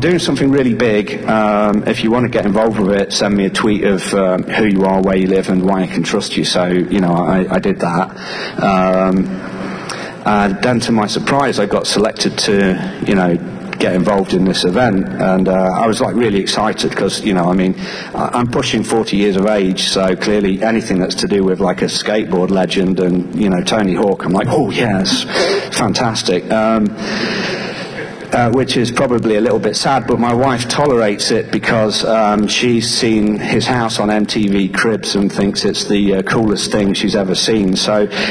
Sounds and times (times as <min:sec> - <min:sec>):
Speech: 0:00.0 - 0:09.4, 0:10.2 - 0:27.0, 0:28.3 - 0:38.3.